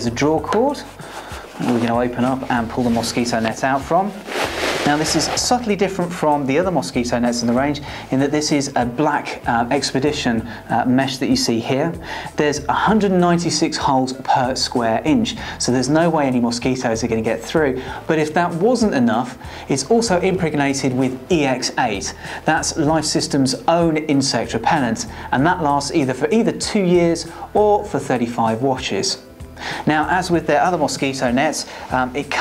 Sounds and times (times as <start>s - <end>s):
Speech: 0.0s - 1.0s, 1.6s - 4.2s, 4.8s - 32.4s.